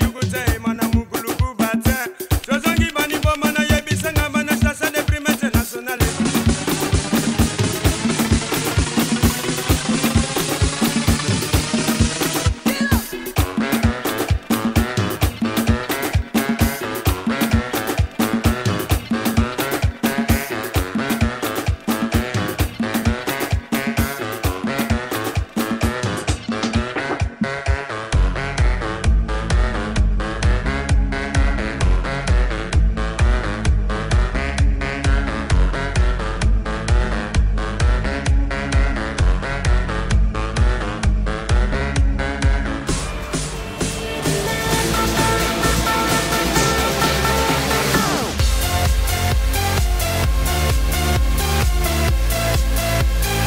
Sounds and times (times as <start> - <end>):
Rhythm and blues: 0.0 - 53.4.